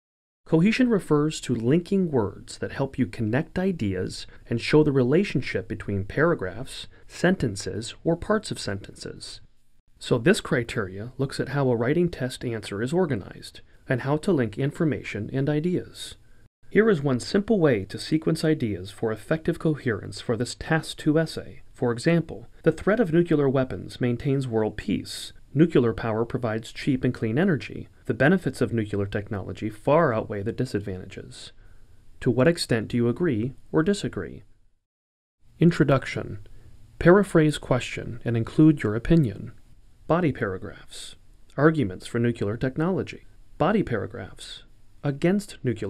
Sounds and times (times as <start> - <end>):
Speech: 0.5 - 31.6, 32.2 - 34.5, 35.6 - 45.8.